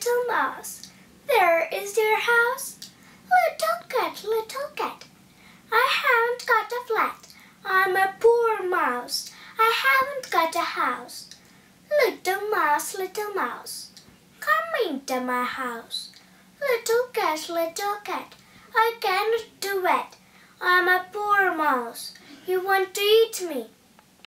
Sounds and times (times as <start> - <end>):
Speech: 0.0 - 5.1, 5.7 - 23.8.